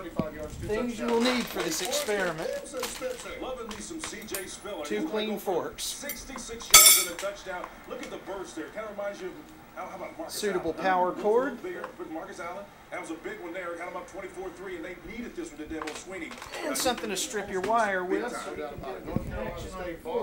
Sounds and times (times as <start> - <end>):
Speech: 0.0 - 20.2.